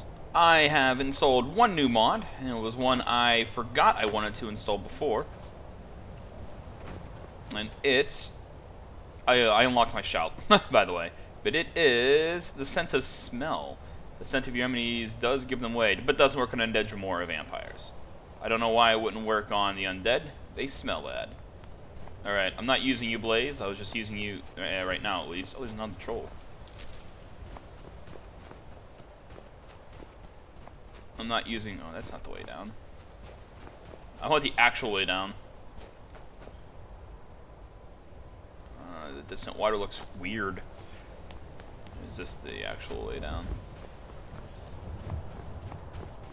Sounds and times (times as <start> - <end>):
Speech: 0.4 - 5.3, 7.5 - 8.4, 9.3 - 21.4, 22.2 - 26.3, 31.2 - 32.8, 34.2 - 35.4, 38.8 - 40.7, 41.9 - 43.6.